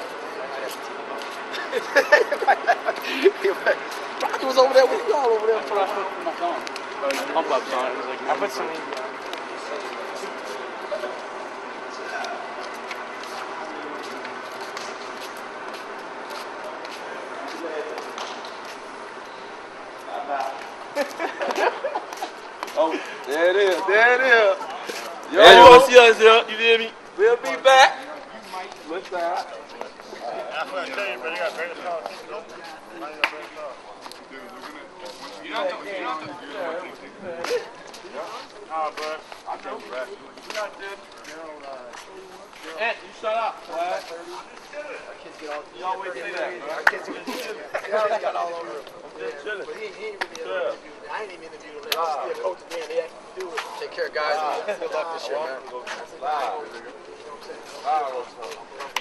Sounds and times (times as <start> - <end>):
Speech: 3.3 - 11.2, 22.7 - 59.0.